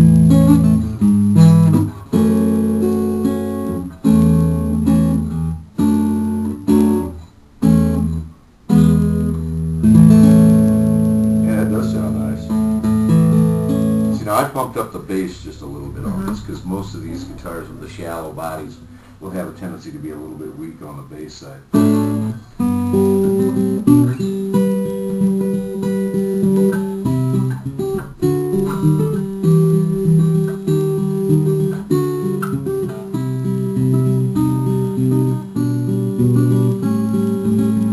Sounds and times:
Strum: 0.0s - 37.9s
Speech: 11.4s - 12.6s, 14.2s - 21.8s.

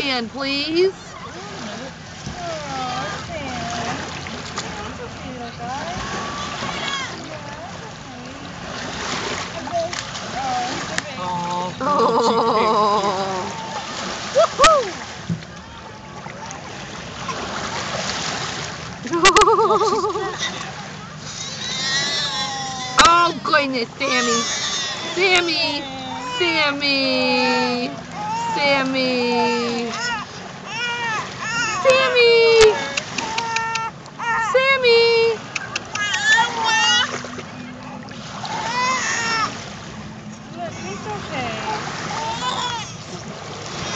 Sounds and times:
Splash, splatter: 8.6s - 11.6s, 16.4s - 19.4s, 32.7s - 33.9s, 35.5s - 39.9s, 41.6s - 43.9s
Speech: 23.0s - 24.5s, 25.1s - 30.1s, 31.8s - 33.1s, 34.5s - 35.4s.

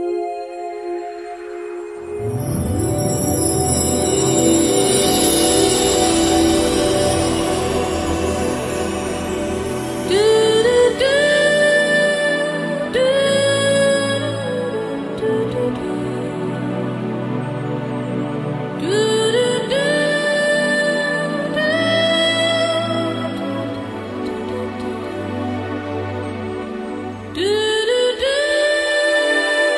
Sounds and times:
Music: 0.0s - 29.7s.

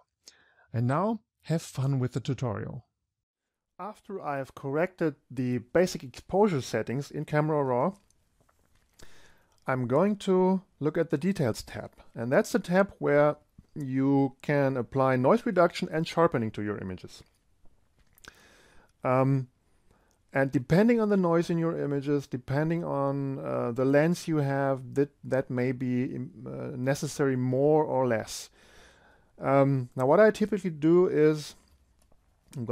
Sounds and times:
Speech: 0.7s - 2.9s, 3.8s - 8.0s, 9.6s - 17.3s, 19.0s - 19.5s, 20.3s - 28.5s, 29.4s - 31.6s.

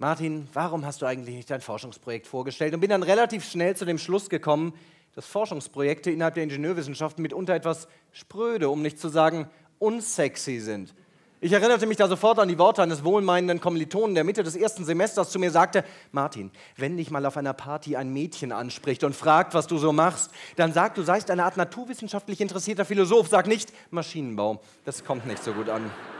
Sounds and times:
Speech: 0.0s - 26.0s.

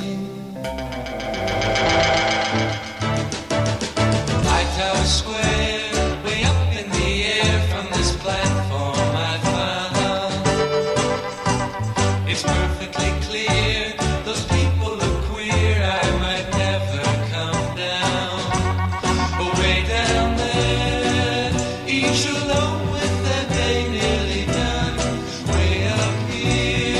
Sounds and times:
Jingle (music): 0.5s - 27.0s.

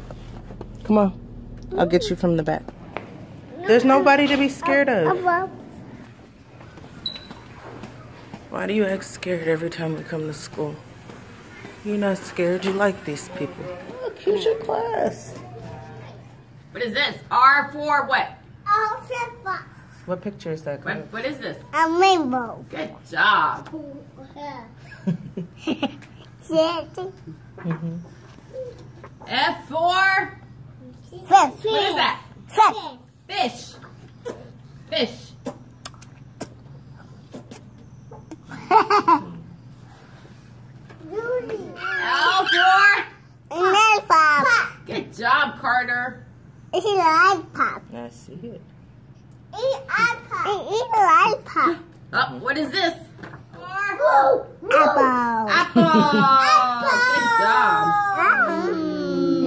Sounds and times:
Child speech, kid speaking: 1.7s - 2.1s, 3.5s - 4.0s, 4.6s - 5.7s, 18.6s - 20.0s, 21.7s - 22.8s, 23.6s - 24.8s, 26.4s - 27.2s, 30.8s - 33.1s, 41.0s - 44.9s, 46.7s - 47.9s, 49.5s - 51.9s, 53.6s - 59.4s.

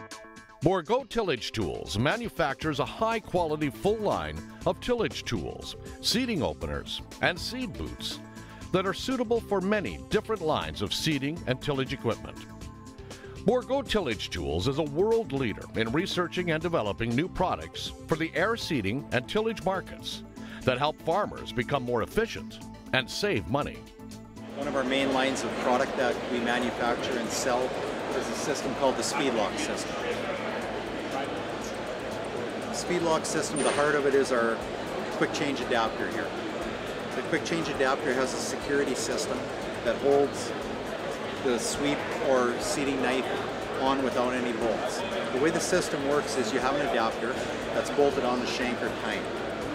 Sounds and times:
Music: 0.0s - 49.7s
Speech: 0.6s - 12.4s, 13.5s - 23.8s, 24.6s - 30.4s, 32.8s - 34.6s, 35.2s - 36.3s, 37.2s - 40.5s, 41.4s - 49.2s.

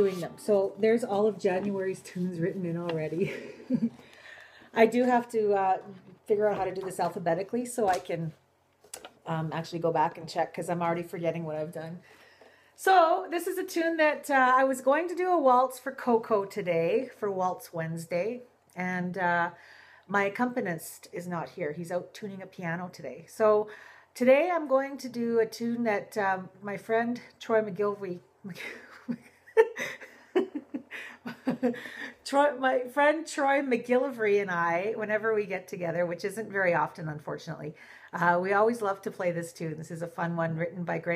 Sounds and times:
Speech: 0.0s - 3.3s, 4.8s - 8.4s, 9.0s - 12.0s, 12.8s - 28.2s, 32.3s - 41.1s.

